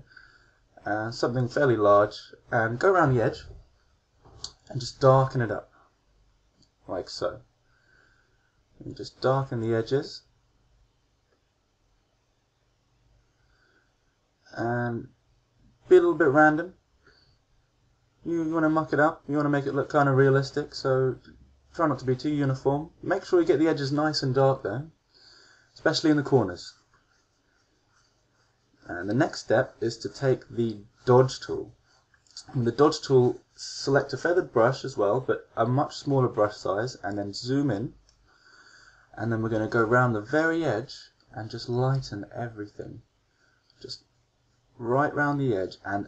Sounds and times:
Speech: 0.8s - 3.6s, 4.4s - 5.7s, 6.8s - 7.5s, 8.8s - 10.3s, 14.5s - 15.2s, 15.9s - 16.8s, 18.2s - 25.0s, 25.8s - 26.8s, 28.8s - 38.0s, 39.2s - 43.0s, 43.8s - 44.0s, 44.8s - 46.0s.

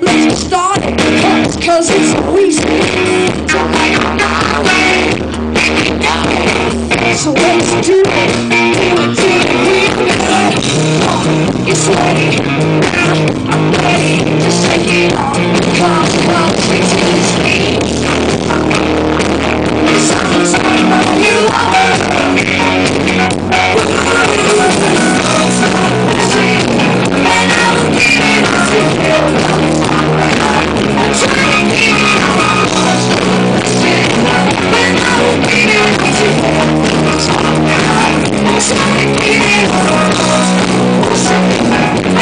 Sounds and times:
Music: 0.0s - 42.2s.

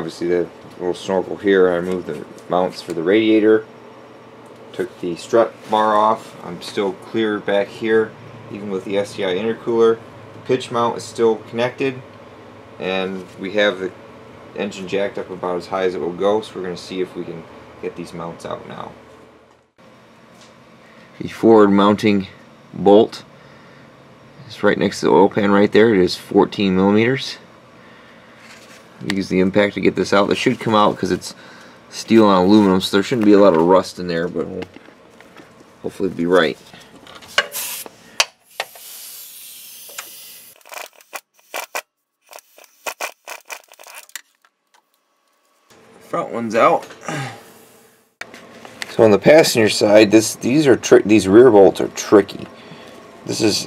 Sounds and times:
Speech: 0.0s - 3.7s, 4.7s - 12.1s, 12.8s - 14.0s, 14.6s - 19.0s, 21.2s - 23.3s, 24.4s - 27.5s, 29.0s - 34.7s, 35.8s - 36.6s, 46.1s - 46.9s, 48.9s - 52.5s, 53.3s - 53.6s.

